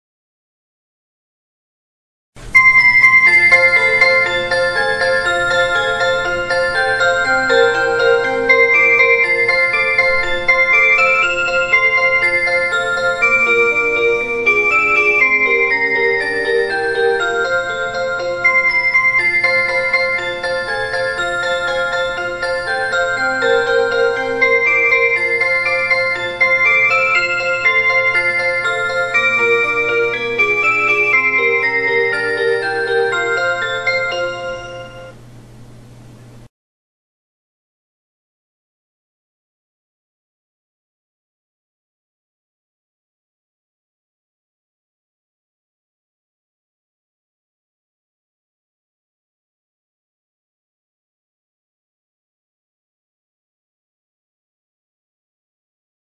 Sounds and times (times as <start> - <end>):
Music: 2.4 - 35.2.